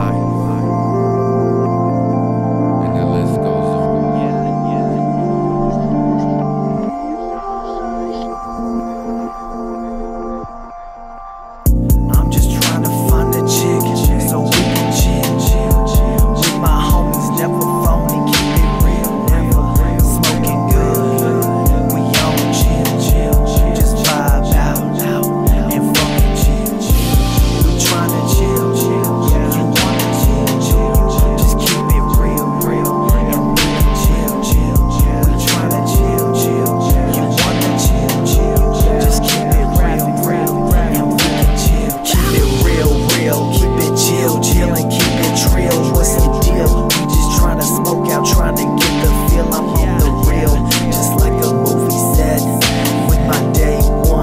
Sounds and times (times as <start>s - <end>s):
Theme music: 0.0s - 8.8s.